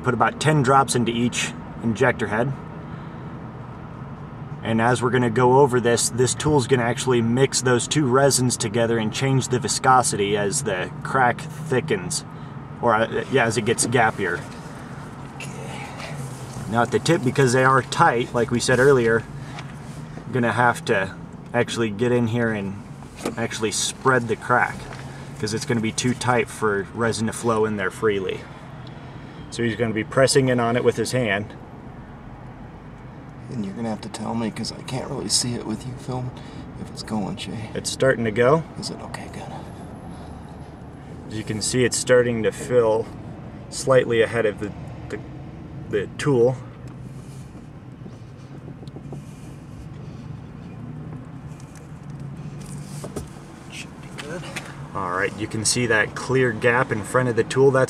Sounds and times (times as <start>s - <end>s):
Speech: 0.0s - 2.6s, 4.6s - 14.5s, 16.7s - 19.3s, 20.3s - 28.5s, 29.5s - 31.6s, 33.4s - 39.7s, 41.3s - 45.2s, 45.9s - 46.7s, 53.7s - 57.8s
Car: 0.0s - 57.8s.